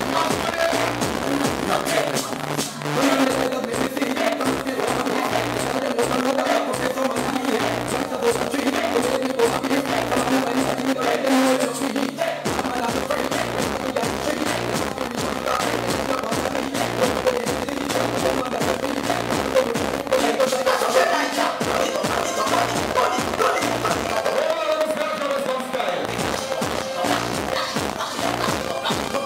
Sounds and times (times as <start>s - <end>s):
Music: 0.0s - 29.2s
Speech: 24.2s - 26.1s.